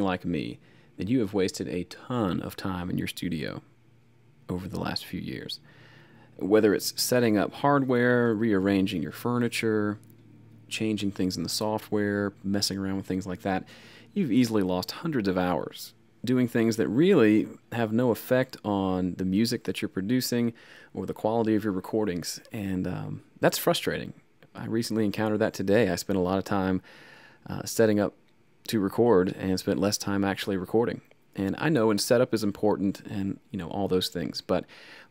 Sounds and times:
Speech: 0.0 - 3.7, 4.5 - 5.7, 6.4 - 26.8, 27.4 - 34.7.

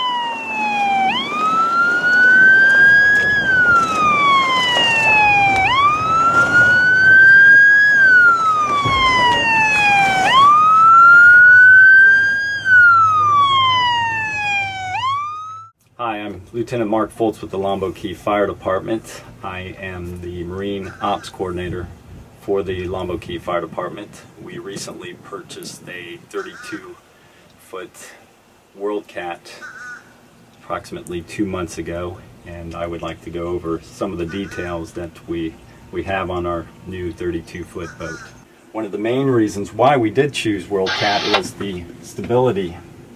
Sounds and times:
Speech: 16.0 - 27.0, 27.6 - 29.6, 30.6 - 42.9.

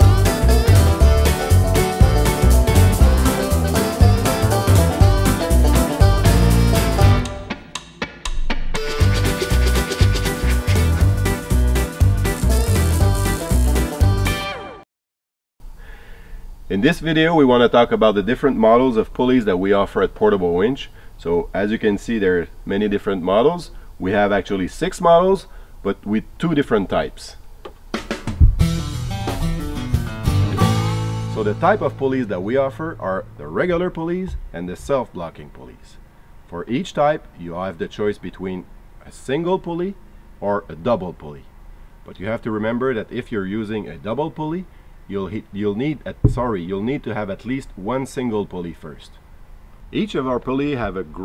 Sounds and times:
Music: 0.0 - 14.8, 27.9 - 34.6.

